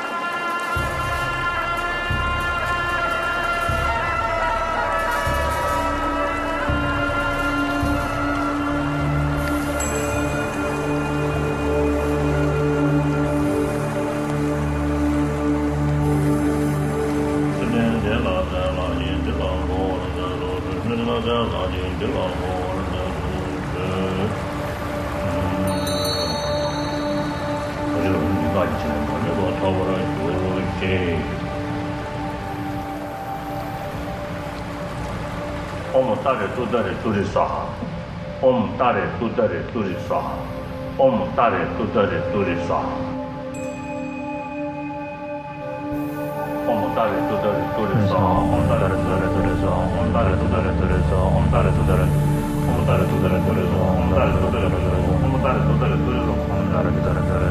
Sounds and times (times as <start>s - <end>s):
Mantra: 0.0s - 34.2s, 35.8s - 57.5s.